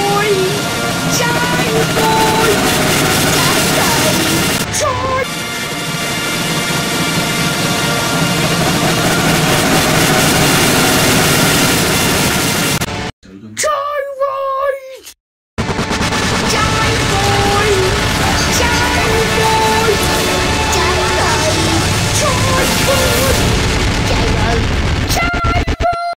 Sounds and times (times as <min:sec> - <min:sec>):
Speech: 0:00.0 - 0:00.6, 0:01.2 - 0:02.6, 0:03.4 - 0:05.3, 0:13.2 - 0:15.2, 0:16.5 - 0:20.1, 0:20.7 - 0:23.4, 0:24.0 - 0:26.1
Music: 0:16.5 - 0:24.6.